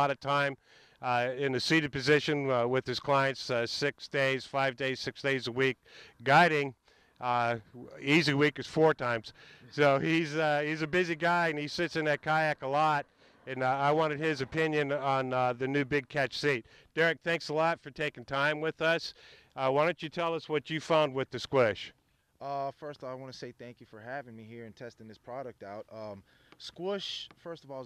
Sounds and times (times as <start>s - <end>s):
Speech: 0.0s - 27.8s.